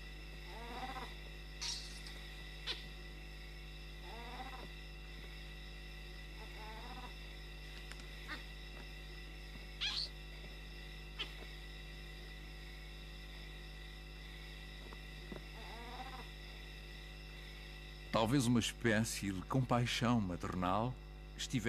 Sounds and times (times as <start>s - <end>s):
Animal: 0.4s - 3.0s, 4.0s - 4.9s, 6.3s - 8.8s, 9.8s - 10.2s, 11.1s - 11.6s, 15.3s - 16.5s.